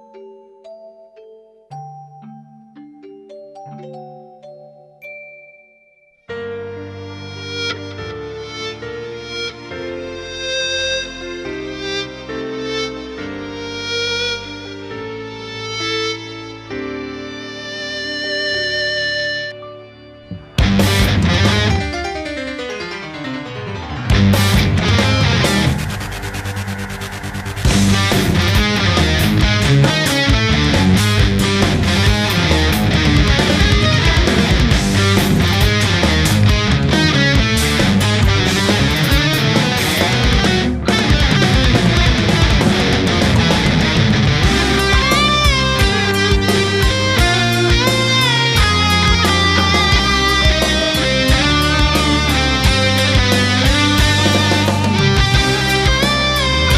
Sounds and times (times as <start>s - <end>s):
Music: 0.0s - 56.7s.